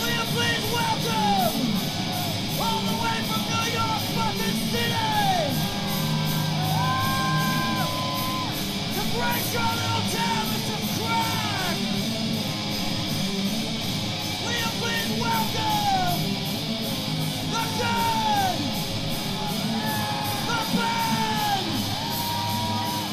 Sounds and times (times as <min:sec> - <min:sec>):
Speech: 0:00.0 - 0:01.7, 0:02.6 - 0:05.6, 0:09.0 - 0:11.8, 0:14.4 - 0:16.2, 0:17.5 - 0:18.7, 0:20.4 - 0:21.8
Punk rock: 0:00.0 - 0:23.1.